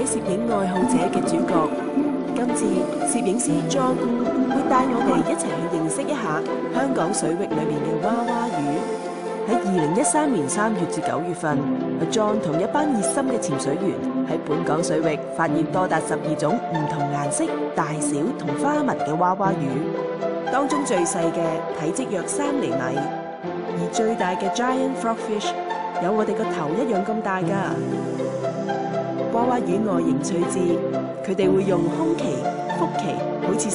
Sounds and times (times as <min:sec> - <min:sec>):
Speech: 0:00.0 - 0:01.8, 0:02.4 - 0:08.9, 0:09.5 - 0:19.9, 0:20.6 - 0:23.1, 0:23.8 - 0:27.8, 0:29.4 - 0:33.7
Music: 0:00.0 - 0:33.7.